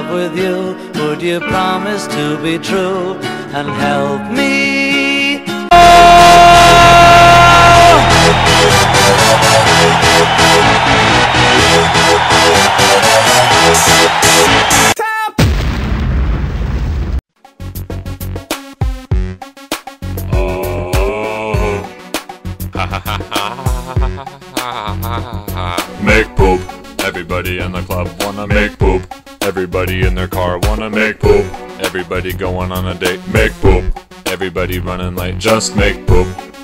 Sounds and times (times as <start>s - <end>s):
Music: 0.0s - 15.0s, 17.4s - 36.6s
Speech: 15.0s - 15.4s, 20.4s - 21.9s, 25.6s - 36.4s.